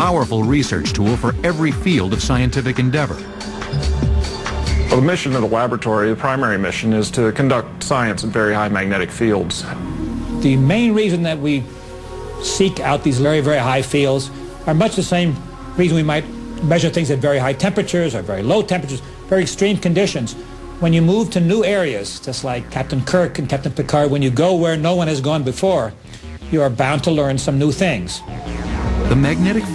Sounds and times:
Speech: 0.0 - 3.2, 4.9 - 9.8, 12.5 - 28.2
Music: 0.0 - 29.7.

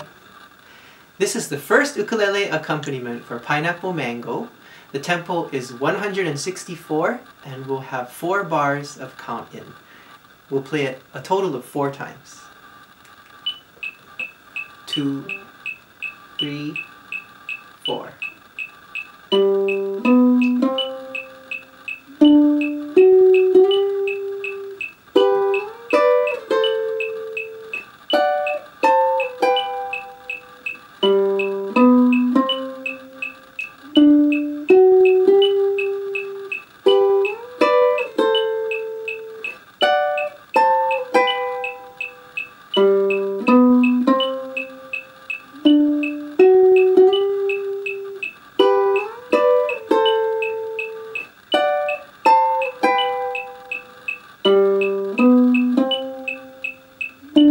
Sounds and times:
Guitar: 0.0 - 57.5
Speech: 1.2 - 9.8, 10.5 - 12.5, 14.9 - 15.4, 16.4 - 16.8, 17.8 - 18.2
Beep, bleep: 13.4 - 22.8, 29.2 - 30.8, 38.3 - 39.6, 41.2 - 42.5, 43.1 - 44.4, 54.8 - 57.5
Ukulele: 19.3 - 57.5.

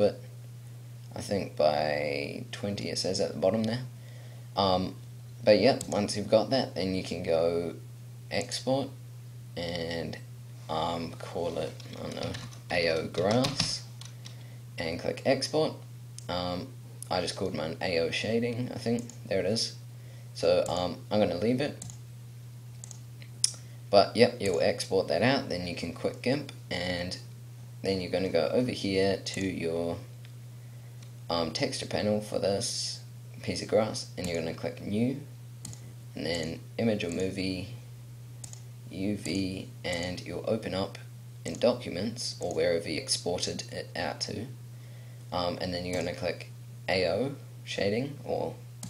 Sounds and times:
Speech: 0.0 - 0.3, 1.1 - 3.9, 4.6 - 9.0, 9.6 - 13.9, 14.8 - 19.8, 20.4 - 21.8, 23.5 - 30.1, 31.3 - 35.3, 36.2 - 37.8, 38.9 - 44.6, 45.3 - 48.6
Computer keyboard: 11.8 - 14.3.

